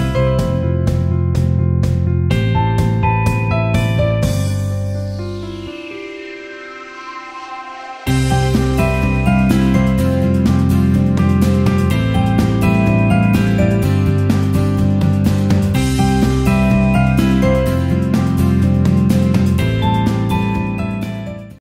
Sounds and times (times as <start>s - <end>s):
Music: 0.0s - 21.6s.